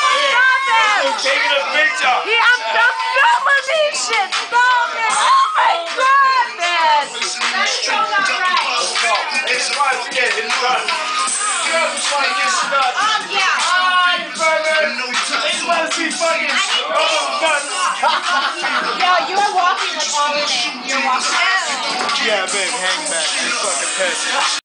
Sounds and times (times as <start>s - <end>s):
Music: 0.0s - 24.6s.